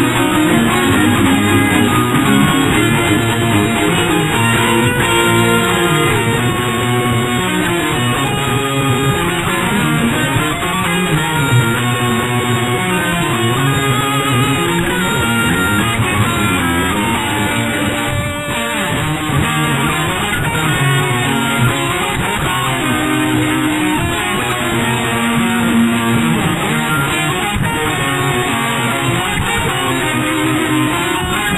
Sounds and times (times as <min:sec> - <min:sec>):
Heavy metal: 0:00.0 - 0:31.5.